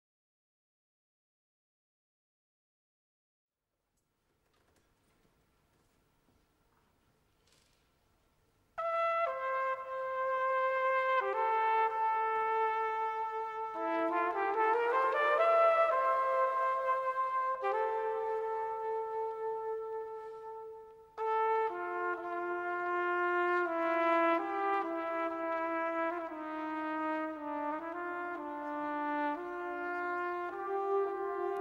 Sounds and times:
Trumpet: 8.7s - 31.6s.

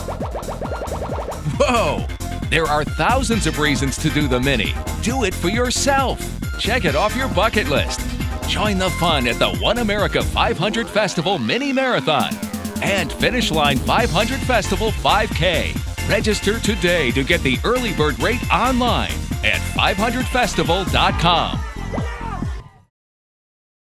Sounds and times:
Music: 0.0s - 22.9s
Speech: 1.5s - 22.8s.

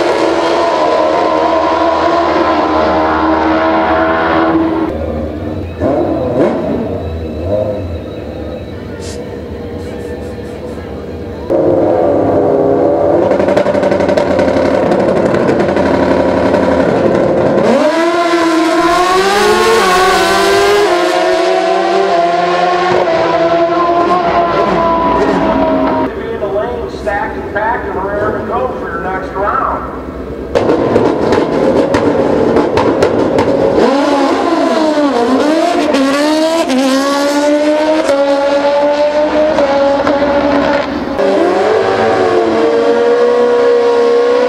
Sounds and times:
Motorcycle: 0.0s - 28.7s, 29.4s - 44.4s.

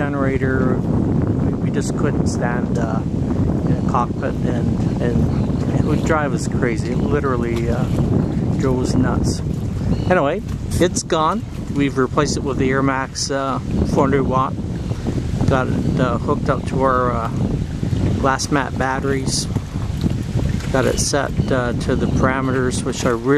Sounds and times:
Speech: 0.0s - 0.8s, 1.5s - 3.0s, 3.7s - 8.0s, 8.6s - 9.4s, 10.1s - 14.6s, 15.5s - 17.4s, 18.2s - 19.5s, 20.7s - 23.3s
Wind noise (microphone): 0.0s - 23.3s.

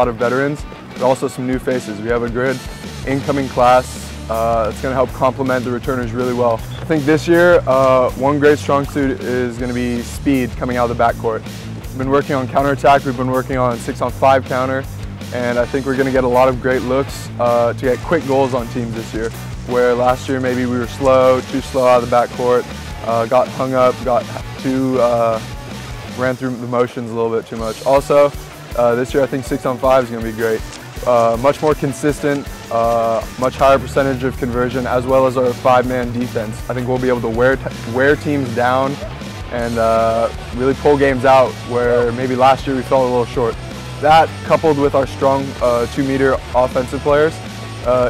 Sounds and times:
Speech: 0.0s - 11.4s, 12.0s - 25.5s, 26.1s - 48.1s
Music: 0.0s - 48.1s.

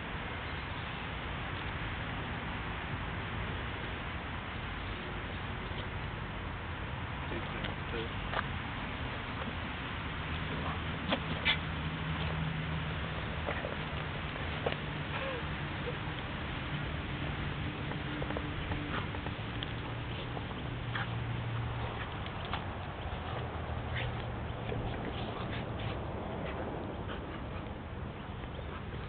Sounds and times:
Dog: 10.5s - 12.3s, 13.4s - 14.0s, 15.1s - 16.0s, 18.2s - 29.0s.

